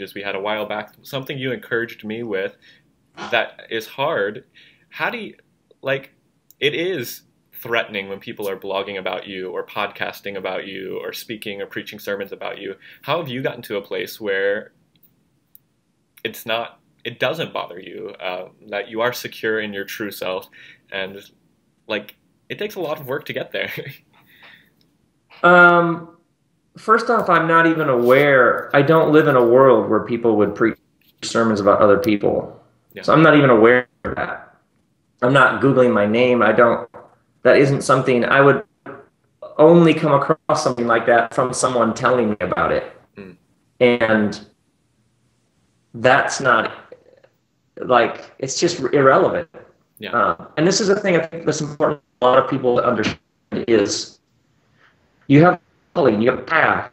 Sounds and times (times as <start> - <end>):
Speech: 0.0 - 2.6, 3.2 - 14.7, 16.2 - 21.3, 21.9 - 24.0, 25.4 - 26.2, 26.8 - 34.6, 35.2 - 44.6, 46.0 - 54.2, 55.3 - 56.9.